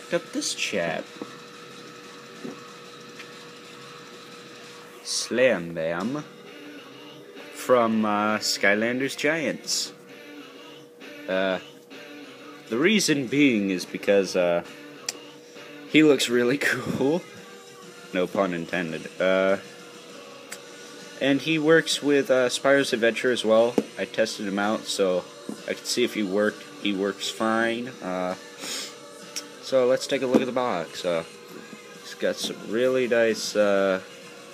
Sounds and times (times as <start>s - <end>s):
Music: 0.0s - 34.5s.